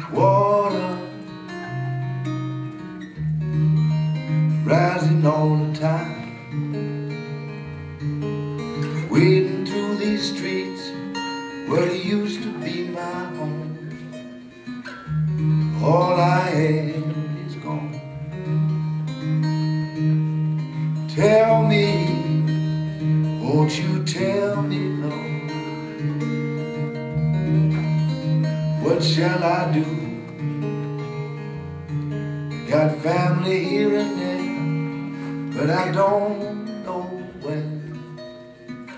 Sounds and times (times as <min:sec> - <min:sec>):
Music: 0:00.0 - 0:38.9.